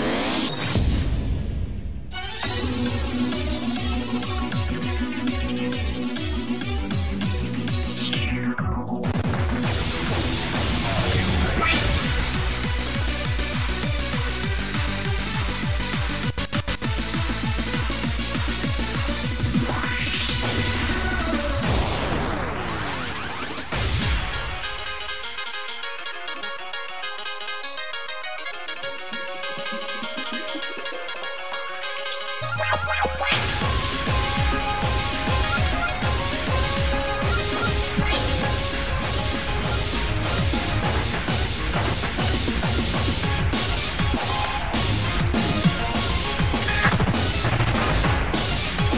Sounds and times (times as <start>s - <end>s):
Music: 0.0s - 48.9s.